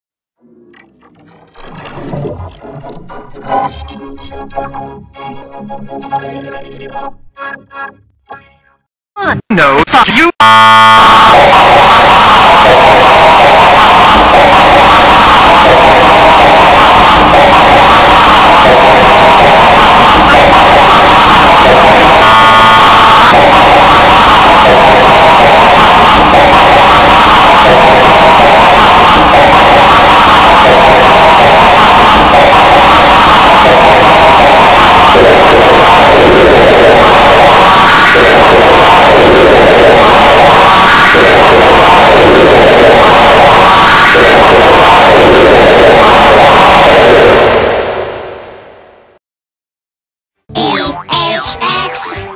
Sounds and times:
Music: 2.8 - 8.9
Speech: 9.2 - 10.5, 50.5 - 52.3.

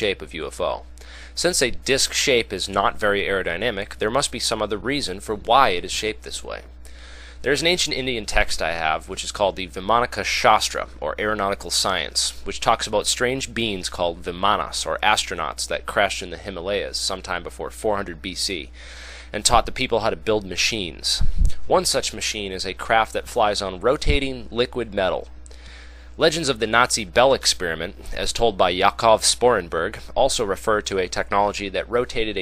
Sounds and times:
Speech: 0.0 - 6.7, 7.4 - 18.7, 19.3 - 25.3, 26.2 - 32.4.

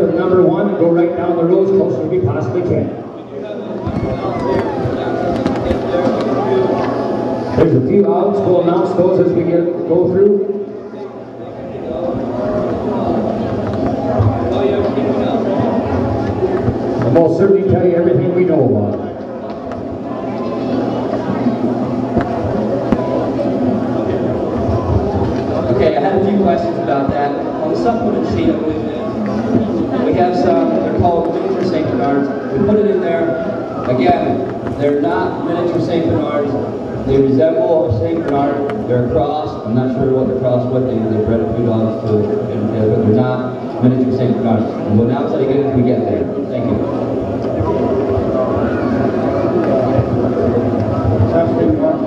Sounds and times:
Speech: 0.0 - 7.0, 7.6 - 13.5, 14.2 - 16.1, 17.0 - 19.2, 24.0 - 47.0, 51.0 - 52.0.

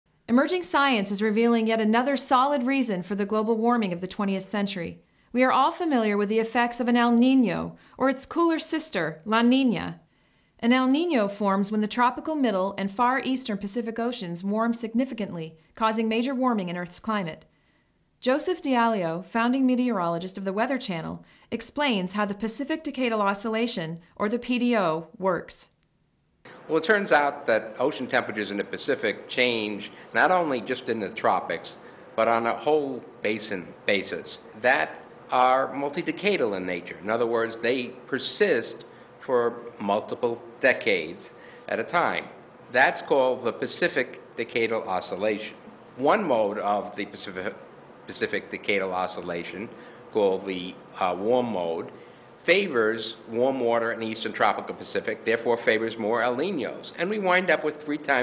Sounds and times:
Speech: 0.3 - 10.0, 10.6 - 17.4, 18.2 - 25.8, 26.7 - 58.2.

